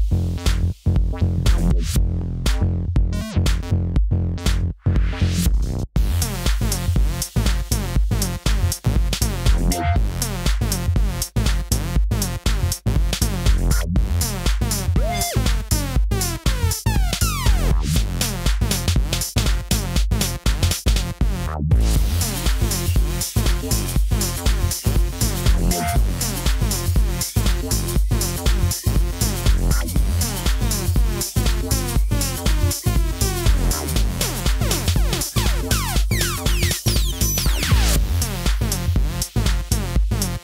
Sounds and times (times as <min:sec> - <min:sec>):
Music: 0:00.0 - 0:40.4.